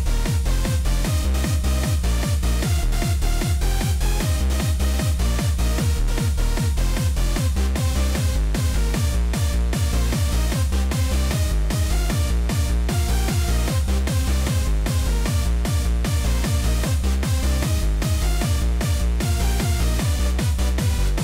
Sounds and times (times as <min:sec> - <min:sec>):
Techno: 0:00.0 - 0:21.2.